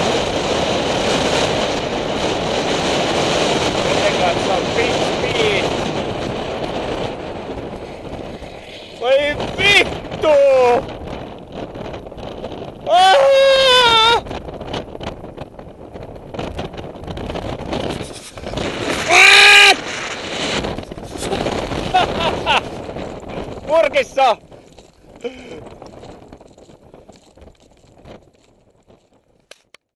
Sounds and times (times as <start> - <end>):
Speech: 3.9 - 5.6, 9.0 - 10.8, 23.7 - 24.4.